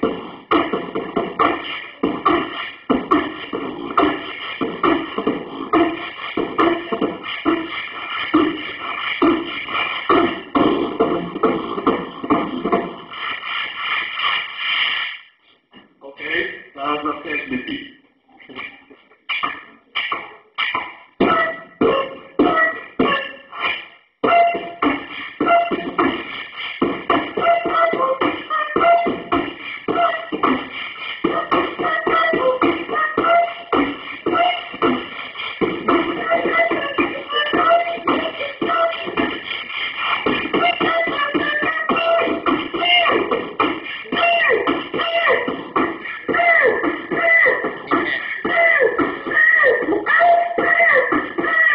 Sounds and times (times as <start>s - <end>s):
Beatboxing: 0.0s - 51.7s
Speech: 16.0s - 19.0s.